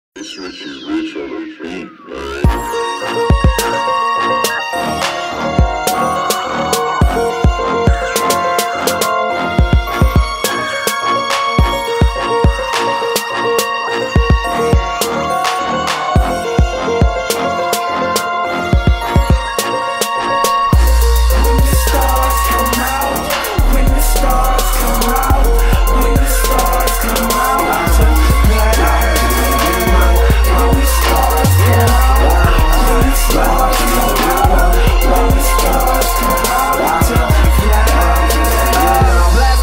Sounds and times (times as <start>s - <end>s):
Music: 0.1s - 39.6s.